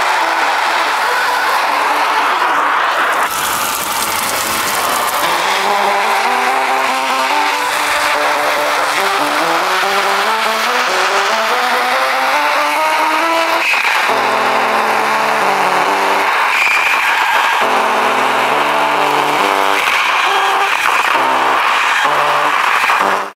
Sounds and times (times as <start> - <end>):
Music: 0.0 - 23.3.